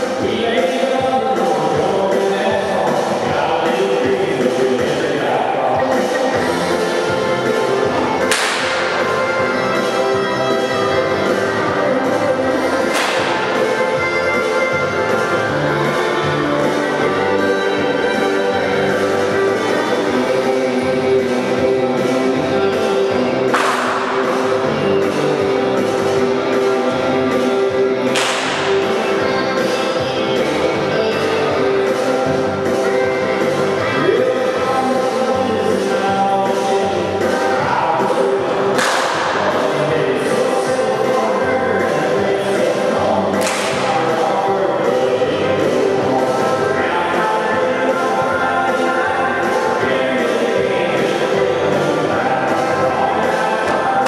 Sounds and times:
Music: 0.0 - 54.0.

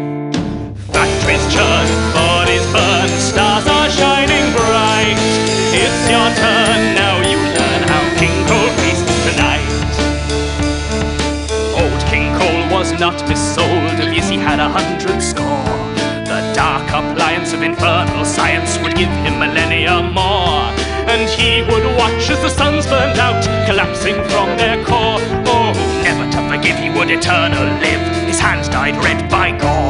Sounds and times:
Music: 0.0 - 29.9.

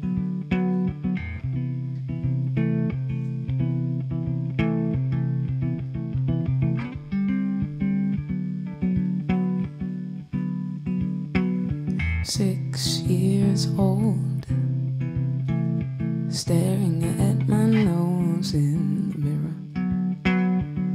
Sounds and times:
Bass guitar: 0.0 - 20.9.

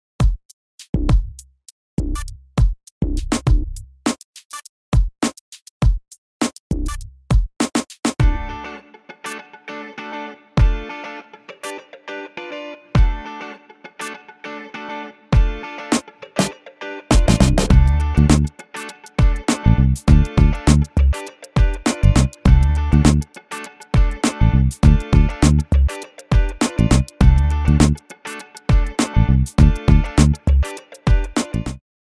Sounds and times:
Music: 0.2 - 31.8.

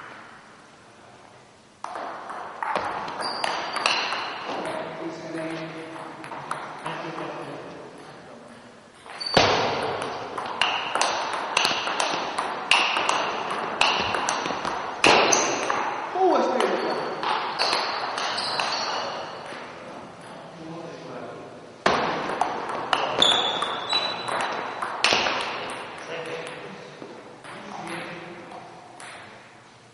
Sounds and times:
Ping: 1.8 - 4.8, 16.6 - 19.6, 22.3 - 26.6, 29.0 - 29.4
Speech: 4.5 - 6.2, 6.8 - 8.6, 16.2 - 17.0, 26.0 - 28.7.

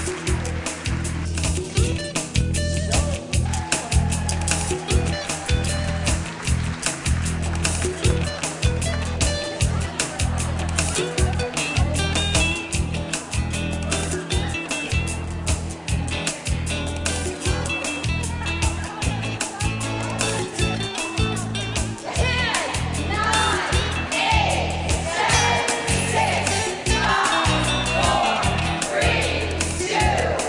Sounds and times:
Salsa music: 0.0 - 30.4
Speech: 17.5 - 21.0.

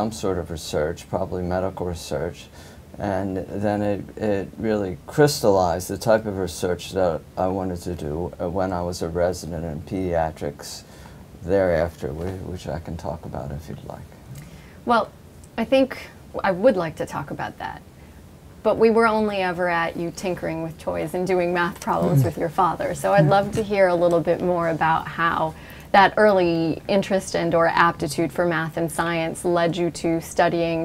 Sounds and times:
Conversation: 0.0 - 30.8.

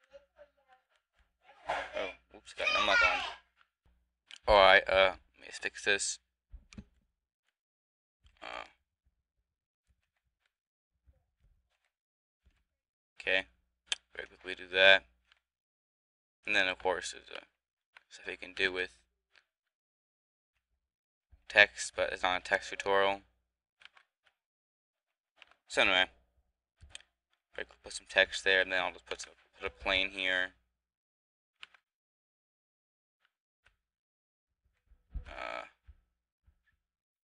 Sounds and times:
Speech: 1.5 - 3.4, 4.5 - 6.2, 13.2 - 13.4, 14.2 - 15.0, 16.5 - 17.4, 18.2 - 18.9, 21.5 - 23.2, 25.7 - 26.1, 27.6 - 30.6, 35.3 - 35.7.

